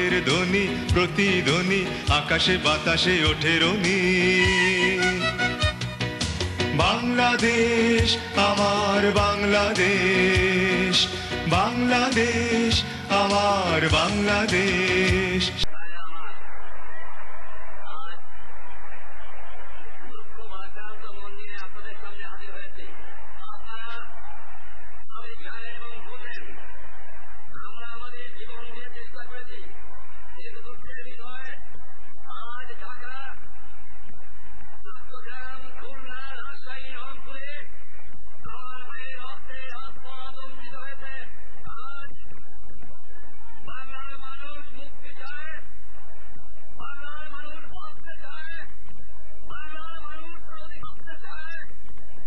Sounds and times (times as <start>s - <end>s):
Male speech, man speaking: 0.0s - 5.3s, 6.8s - 16.4s, 20.4s - 24.0s, 25.2s - 26.5s, 27.6s - 29.7s, 30.4s - 31.6s, 32.3s - 33.4s, 34.9s - 37.7s, 38.5s - 42.3s, 43.6s - 45.7s, 46.8s - 48.7s, 49.5s - 51.7s.